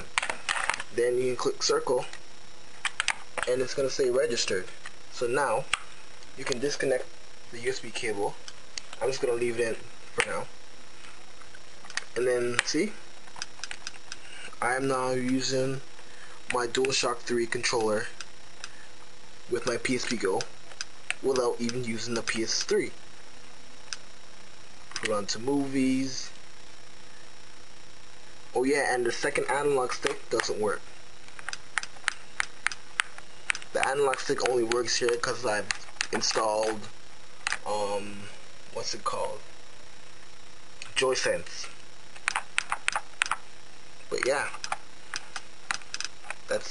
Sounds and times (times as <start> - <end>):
Speech: 0.9 - 2.1, 3.4 - 5.7, 6.4 - 8.4, 9.0 - 10.5, 12.2 - 13.0, 14.6 - 15.9, 16.5 - 18.2, 19.5 - 20.5, 21.2 - 23.0, 25.0 - 26.4, 28.5 - 30.8, 33.7 - 37.0, 37.6 - 39.5, 40.9 - 41.8, 44.1 - 44.6, 46.5 - 46.7.